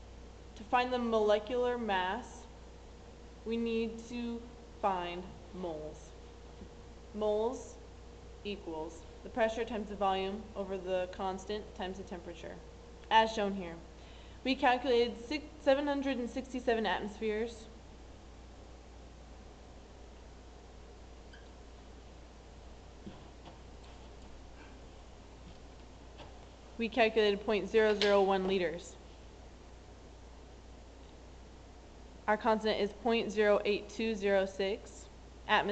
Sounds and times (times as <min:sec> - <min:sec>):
Speech: 0:00.6 - 0:02.5, 0:03.5 - 0:06.2, 0:07.2 - 0:07.8, 0:08.5 - 0:13.9, 0:14.5 - 0:17.7, 0:26.8 - 0:29.0, 0:32.3 - 0:35.7.